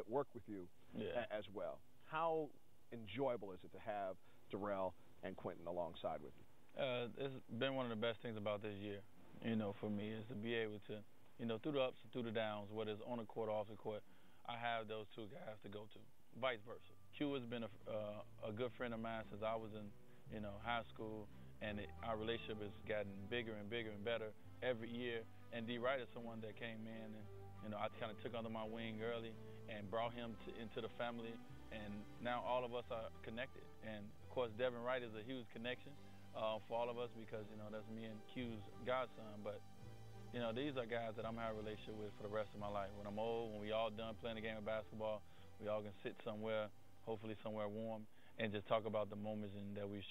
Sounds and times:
Speech: 0.0 - 39.6, 40.4 - 50.1.

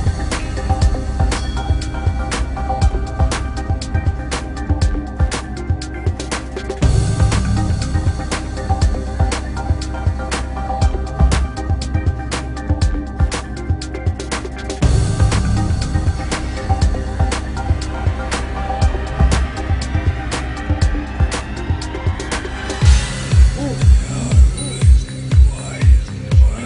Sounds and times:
Music: 0.0 - 26.6.

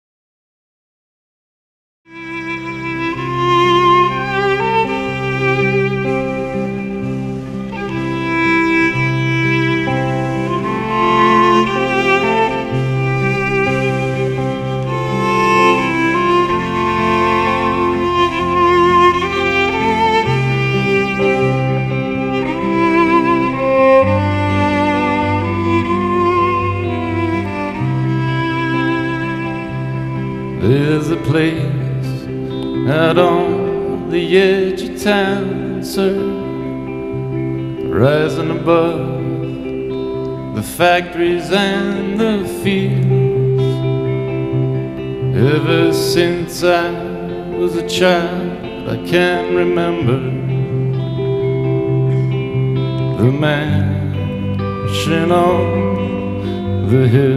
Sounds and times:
Steel guitar, slide guitar: 2.2 - 57.3.

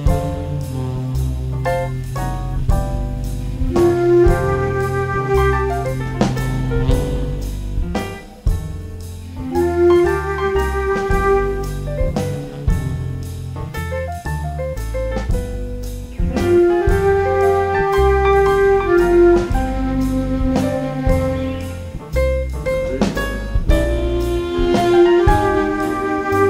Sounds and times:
Flute: 3.6 - 8.2, 9.4 - 13.3, 16.1 - 22.0, 23.0 - 26.4.

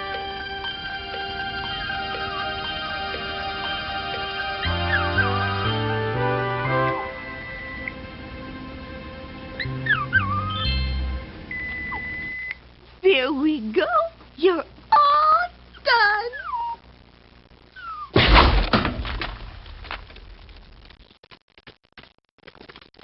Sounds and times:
Music: 0.0 - 11.9
Speech: 13.0 - 16.5.

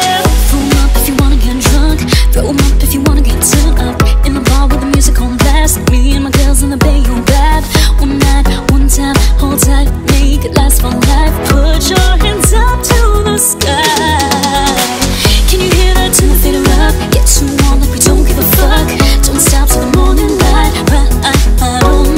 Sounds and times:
Music: 0.0 - 22.1.

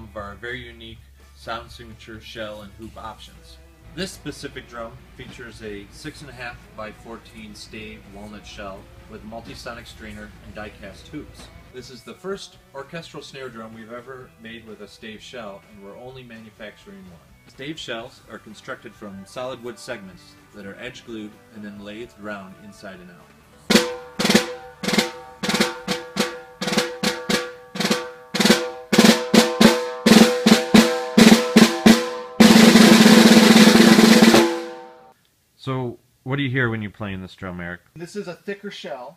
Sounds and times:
Bass drum: 23.7 - 35.0
Drum roll: 23.7 - 35.1.

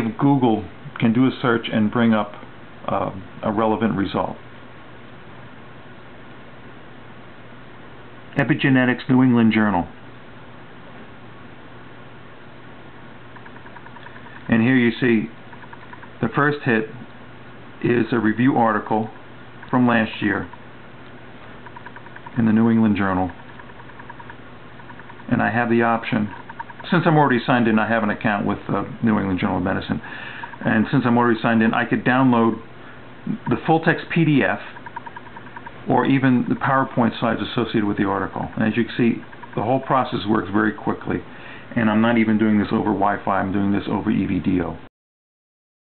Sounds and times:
Speech: 0.0 - 4.4, 8.3 - 10.0, 14.5 - 15.4, 16.2 - 17.1, 17.8 - 20.6, 22.4 - 23.4, 25.3 - 32.7, 33.3 - 34.8, 35.8 - 44.9.

